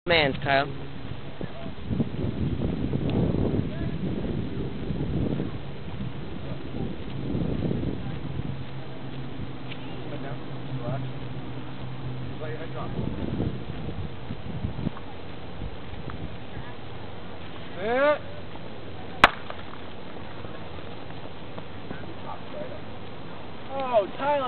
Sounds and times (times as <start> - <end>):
Outside, urban or manmade: 0.0 - 24.4
Run: 0.4 - 24.4.